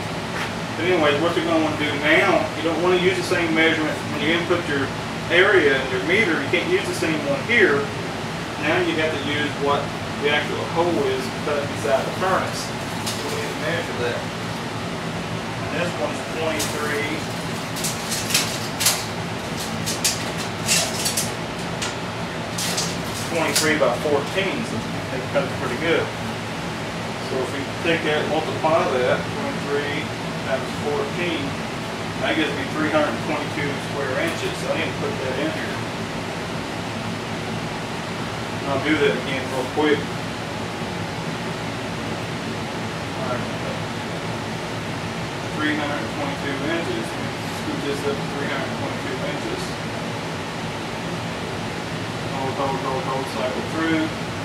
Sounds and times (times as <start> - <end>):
Speech: 0.8 - 8.0, 8.6 - 14.3, 15.7 - 17.2, 23.3 - 26.2, 27.2 - 31.6, 32.2 - 35.8, 38.6 - 40.1, 43.2 - 43.8, 45.5 - 49.8, 52.3 - 54.2.